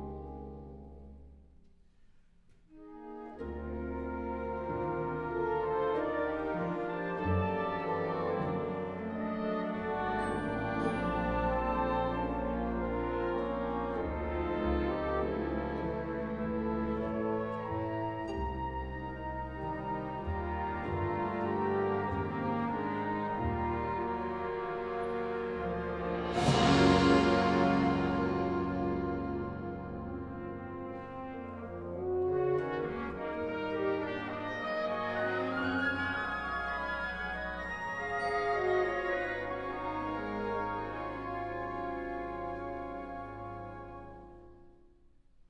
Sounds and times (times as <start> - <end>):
Music: 0.0 - 45.4.